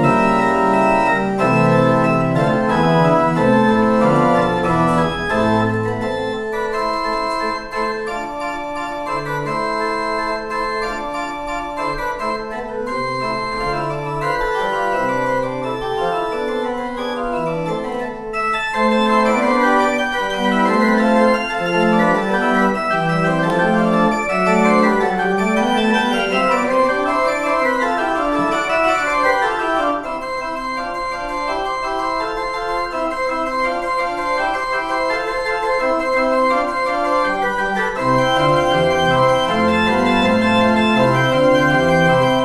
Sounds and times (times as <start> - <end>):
Christian music: 0.0 - 42.4
Organ: 0.0 - 42.4.